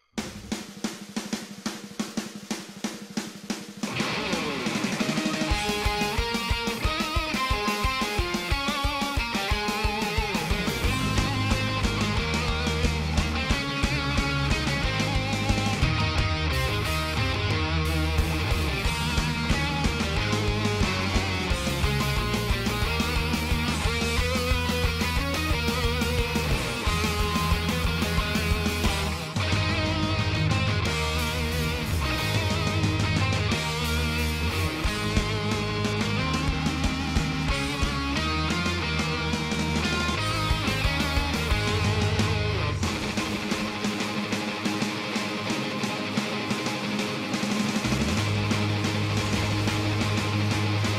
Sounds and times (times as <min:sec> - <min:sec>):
Music: 0:00.0 - 0:50.9.